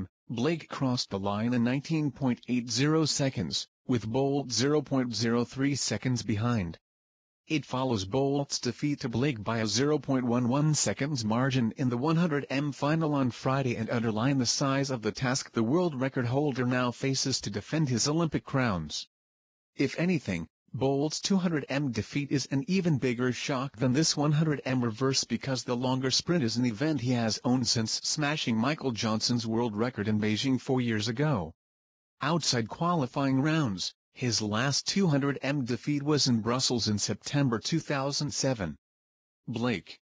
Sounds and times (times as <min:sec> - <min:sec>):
Speech: 0:00.0 - 0:06.8, 0:07.5 - 0:19.1, 0:19.8 - 0:31.6, 0:32.2 - 0:38.8, 0:39.5 - 0:40.0.